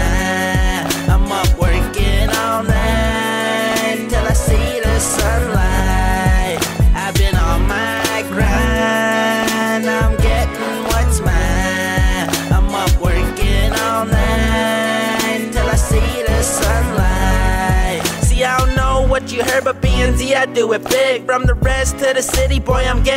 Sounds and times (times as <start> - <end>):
Music: 0.0 - 23.1.